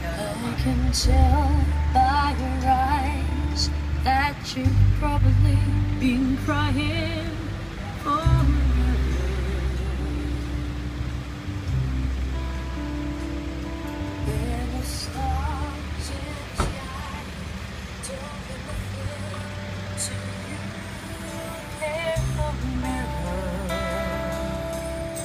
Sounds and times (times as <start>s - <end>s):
Car: 0.0s - 25.2s
Music: 0.0s - 25.2s.